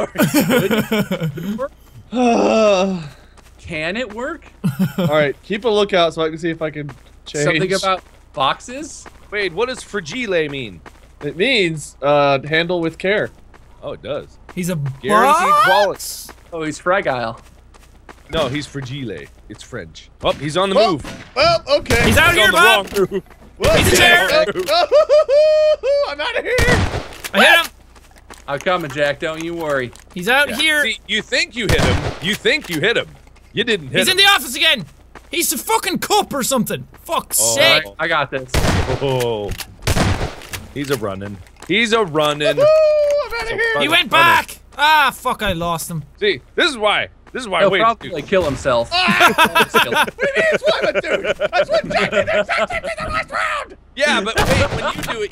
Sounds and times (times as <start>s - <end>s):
Gunshot, gunfire: 20.2s - 22.3s, 26.6s - 27.2s, 31.7s - 32.4s, 38.5s - 40.5s, 54.4s - 55.2s.